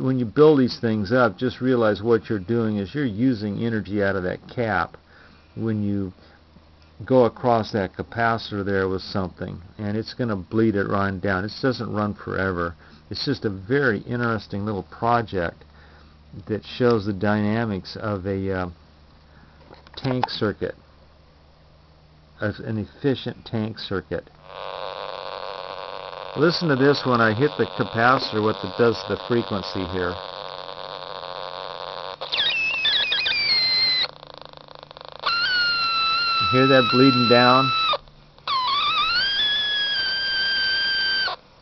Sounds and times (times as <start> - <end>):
Speech: 0.0 - 5.0, 5.6 - 6.2, 7.0 - 15.6, 16.4 - 18.8, 20.0 - 20.8, 22.4 - 24.3, 26.4 - 30.2, 36.4 - 37.8
Inside, small room: 0.0 - 41.6.